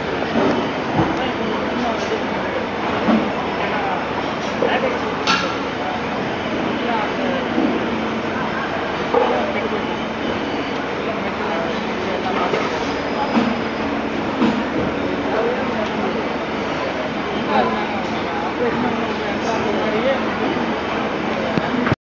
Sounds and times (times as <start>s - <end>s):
Speech: 0.0s - 22.0s.